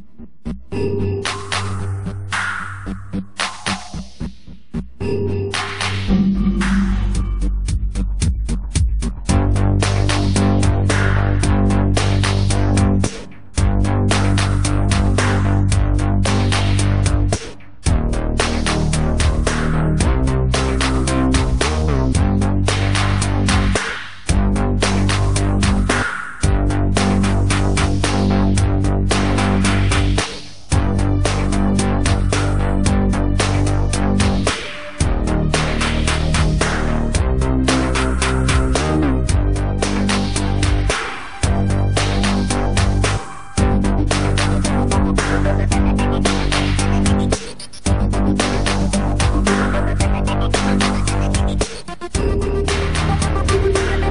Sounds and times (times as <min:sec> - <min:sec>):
Music: 0:00.0 - 0:54.1.